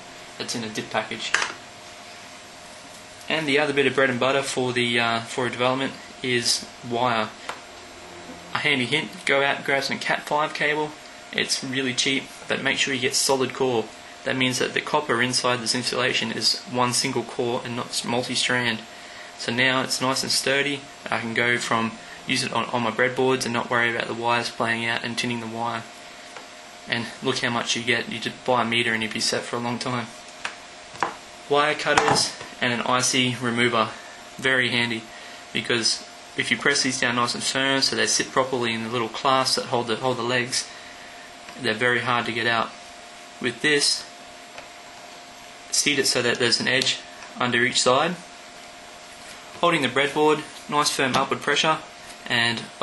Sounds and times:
Speech: 0:00.4 - 0:01.6, 0:03.3 - 0:07.4, 0:08.5 - 0:25.9, 0:26.9 - 0:30.2, 0:31.5 - 0:40.7, 0:41.6 - 0:42.8, 0:43.4 - 0:44.1, 0:45.7 - 0:48.3, 0:49.6 - 0:52.8.

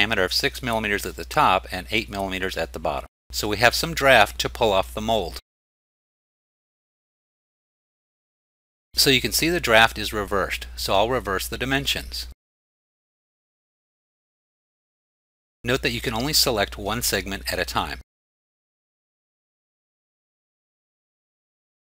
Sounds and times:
Speech: 0:00.0 - 0:05.4, 0:09.0 - 0:12.4, 0:15.7 - 0:18.0.

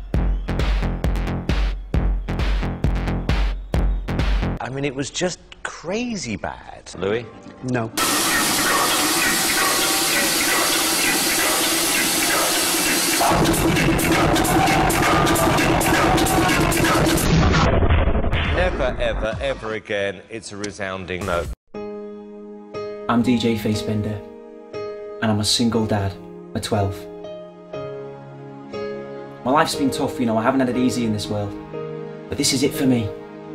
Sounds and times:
Electronic music: 0:00.0 - 0:04.6, 0:08.0 - 0:17.7
Speech: 0:04.6 - 0:08.0, 0:18.5 - 0:21.6, 0:23.1 - 0:24.3, 0:25.2 - 0:27.1, 0:29.4 - 0:31.6, 0:32.3 - 0:33.2.

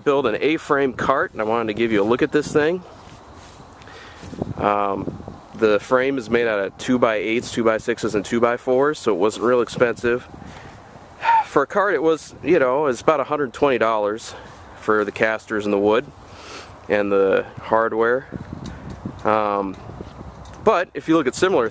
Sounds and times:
Speech: 0:00.0 - 0:02.9, 0:04.6 - 0:10.3, 0:11.2 - 0:16.1, 0:16.9 - 0:18.4, 0:19.2 - 0:19.8, 0:20.6 - 0:21.7.

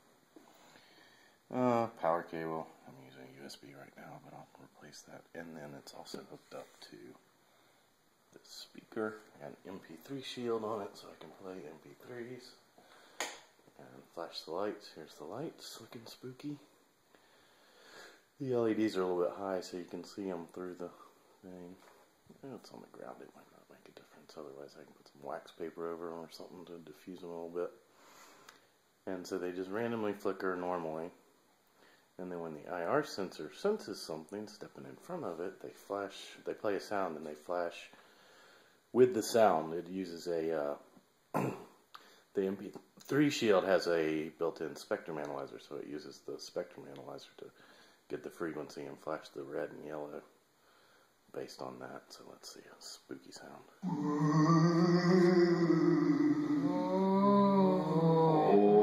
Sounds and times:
Speech: 0:01.5 - 0:07.2, 0:08.4 - 0:12.6, 0:13.8 - 0:16.7, 0:18.4 - 0:27.8, 0:29.1 - 0:31.2, 0:32.2 - 0:38.0, 0:39.0 - 0:40.9, 0:42.4 - 0:50.3, 0:51.3 - 0:58.8.

